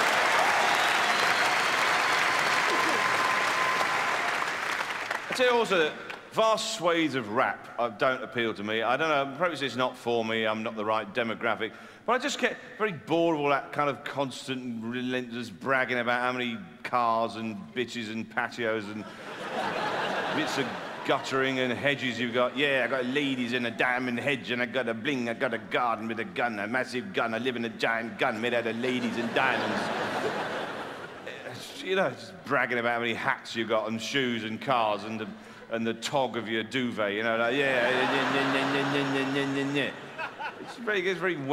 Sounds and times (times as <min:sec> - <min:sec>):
Speech: 0:05.3 - 0:19.1, 0:20.4 - 0:29.9, 0:31.3 - 0:40.0, 0:40.7 - 0:41.5.